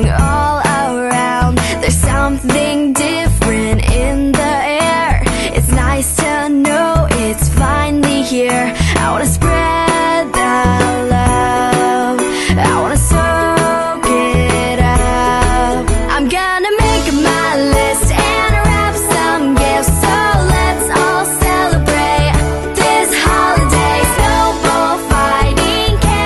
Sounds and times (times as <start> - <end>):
Soundtrack music: 18.2 - 26.2.